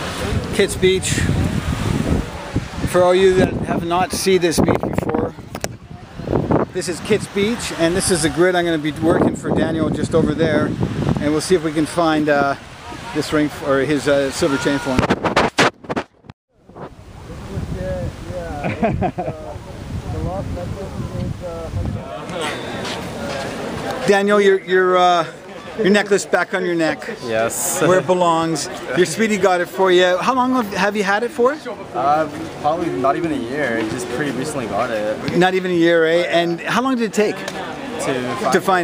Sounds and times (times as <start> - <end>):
Outside, rural or natural: 0.0 - 38.8.